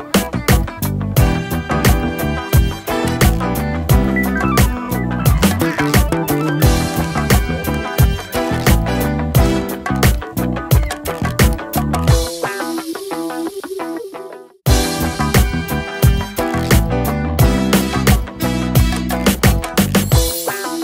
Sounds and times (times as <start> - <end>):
Music: 0.0 - 20.8.